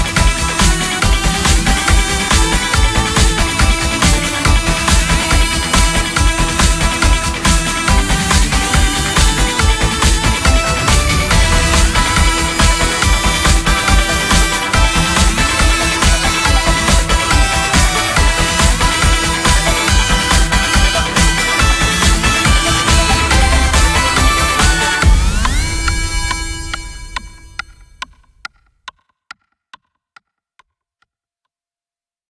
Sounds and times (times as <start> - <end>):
Music: 0.0 - 30.0.